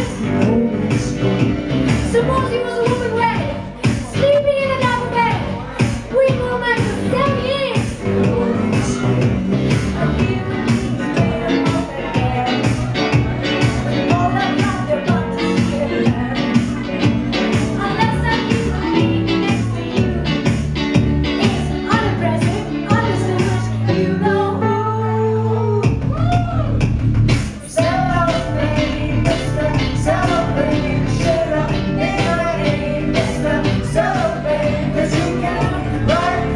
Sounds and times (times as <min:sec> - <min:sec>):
Singing: 0:00.0 - 0:20.6, 0:21.3 - 0:26.6, 0:27.6 - 0:36.5
Music: 0:00.0 - 0:36.5.